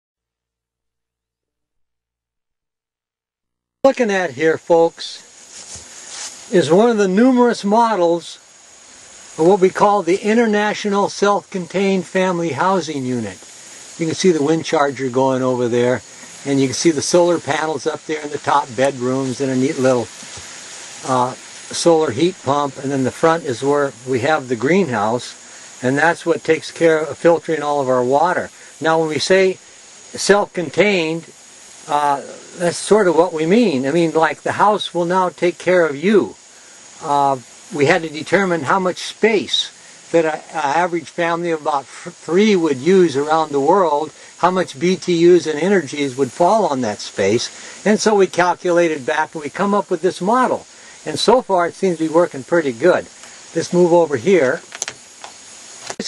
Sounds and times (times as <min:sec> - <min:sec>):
Outside, rural or natural: 0:00.4 - 0:56.0
Speech: 0:03.9 - 0:05.3, 0:06.5 - 0:08.4, 0:09.4 - 0:13.4, 0:14.0 - 0:20.1, 0:21.0 - 0:31.3, 0:31.9 - 0:36.4, 0:37.0 - 0:54.6.